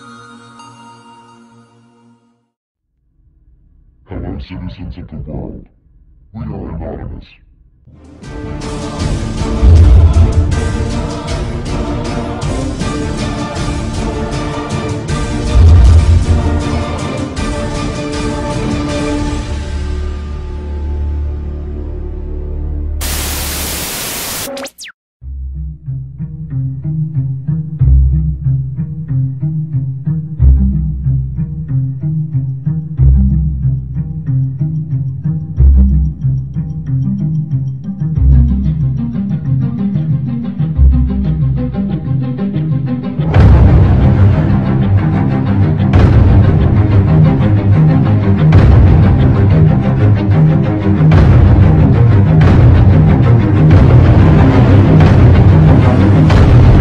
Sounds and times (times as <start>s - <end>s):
Dubstep: 23.0s - 25.0s.